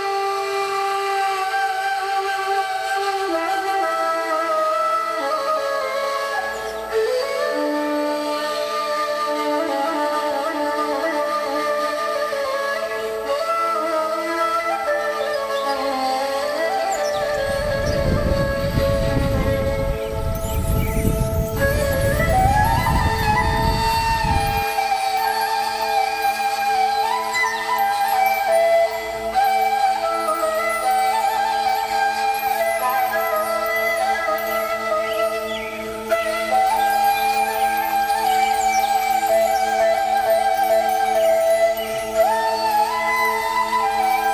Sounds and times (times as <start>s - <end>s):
Music: 0.0s - 44.3s
Bird: 15.2s - 18.9s, 34.4s - 35.9s.